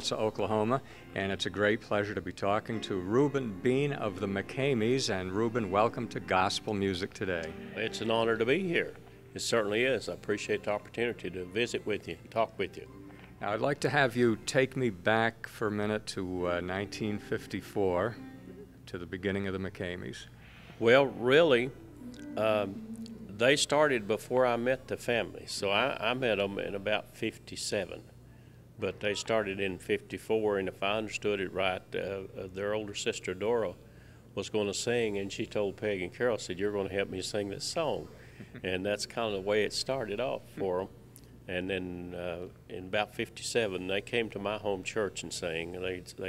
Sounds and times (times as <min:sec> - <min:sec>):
Speech: 0:00.0 - 0:18.2, 0:18.9 - 0:22.7, 0:23.3 - 0:28.1, 0:28.8 - 0:33.8, 0:34.4 - 0:40.9, 0:41.5 - 0:46.2.